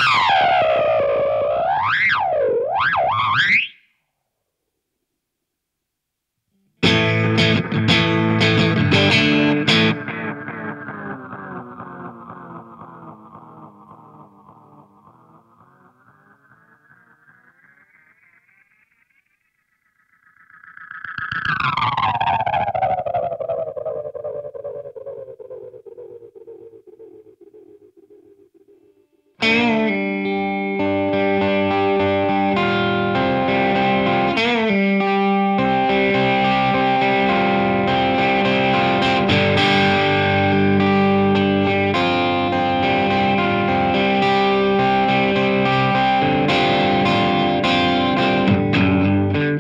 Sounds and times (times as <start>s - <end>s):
Effects unit: 0.0s - 49.6s
Music: 6.5s - 17.5s, 29.3s - 49.6s.